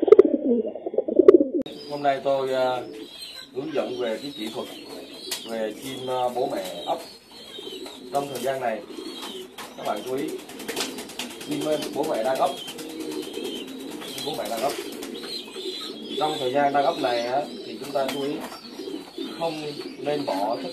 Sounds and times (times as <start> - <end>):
Pigeon, dove: 0.0 - 20.7
Speech: 1.9 - 2.9, 3.6 - 4.8, 5.5 - 7.0, 8.1 - 8.8, 9.8 - 10.4, 11.5 - 12.6, 14.2 - 14.8, 16.2 - 18.5, 19.4 - 20.7.